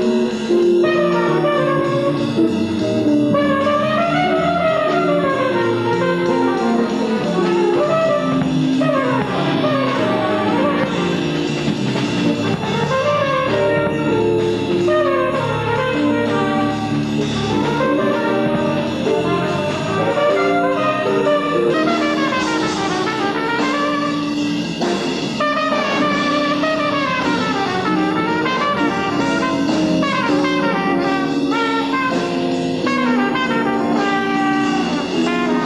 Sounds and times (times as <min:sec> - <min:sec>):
Jazz: 0:00.0 - 0:35.6.